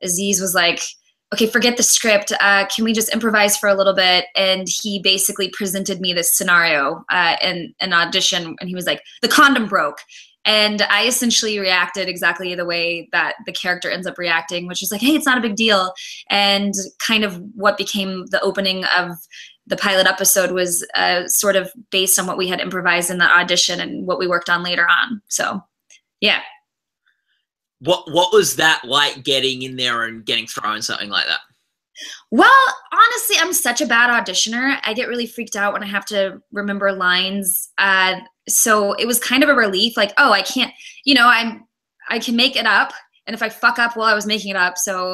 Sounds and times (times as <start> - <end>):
Speech: 0.0 - 25.6, 26.2 - 26.6, 27.8 - 31.4, 32.0 - 45.1.